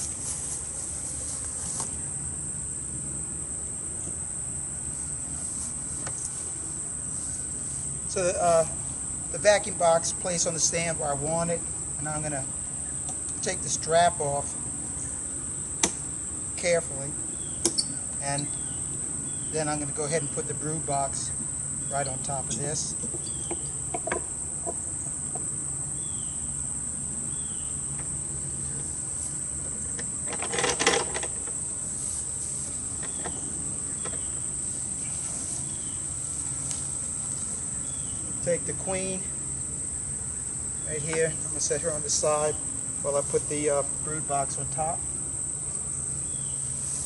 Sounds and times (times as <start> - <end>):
Cricket: 0.0 - 47.0.